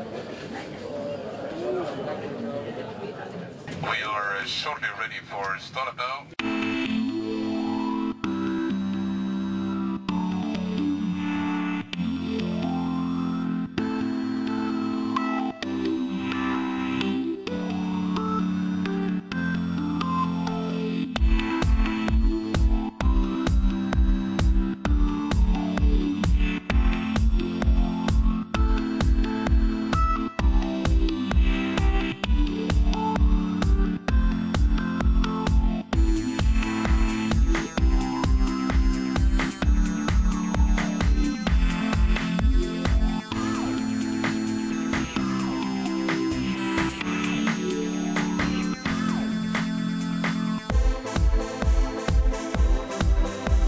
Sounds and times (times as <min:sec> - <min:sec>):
Music: 0:06.4 - 0:53.6.